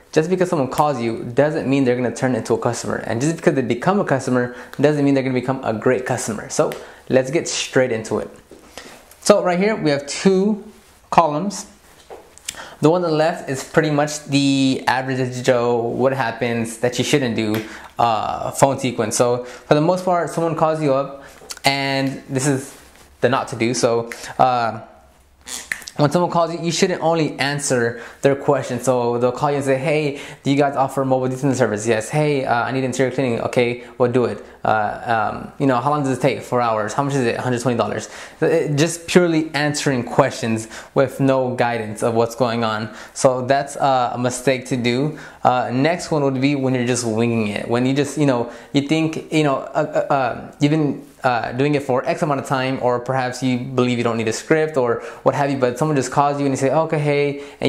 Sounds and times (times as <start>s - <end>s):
Speech: 0.0s - 8.5s, 9.2s - 11.8s, 12.8s - 25.0s, 25.8s - 57.6s.